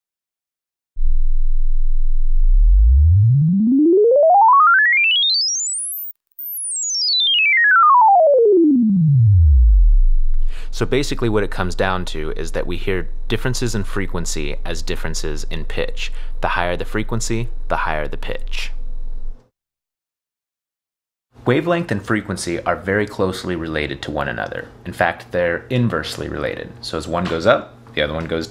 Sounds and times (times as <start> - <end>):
Speech: 10.6 - 18.8, 21.4 - 28.5.